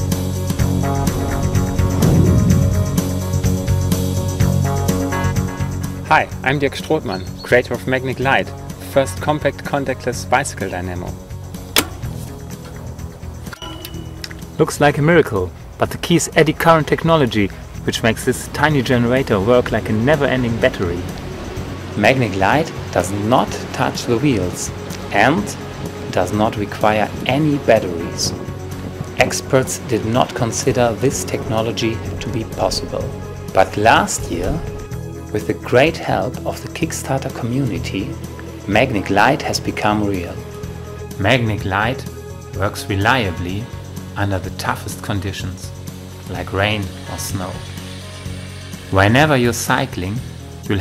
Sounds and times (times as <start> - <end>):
Music: 0.0 - 50.8
Speech: 6.1 - 11.2, 14.6 - 21.1, 22.0 - 28.4, 29.2 - 34.7, 35.3 - 40.4, 41.2 - 45.7, 46.3 - 47.7, 48.9 - 50.8.